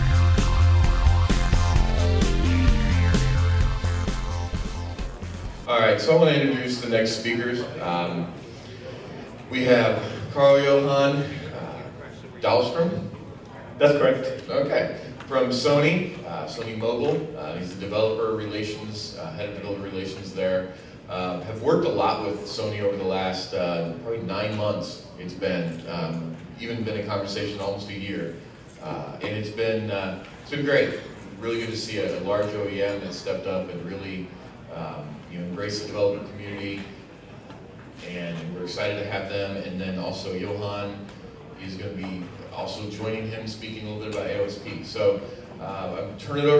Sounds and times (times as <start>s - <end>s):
Male speech, man speaking: 5.7s - 13.2s, 13.8s - 37.0s, 38.0s - 46.5s.